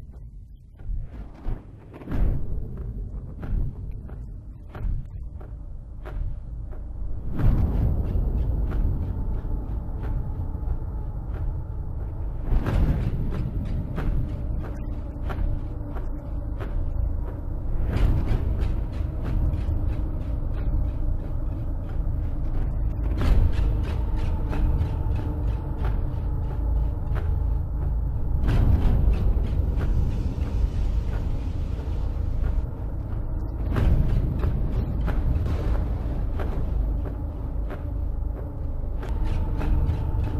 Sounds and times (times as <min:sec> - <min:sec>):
Music: 0:00.0 - 0:40.3.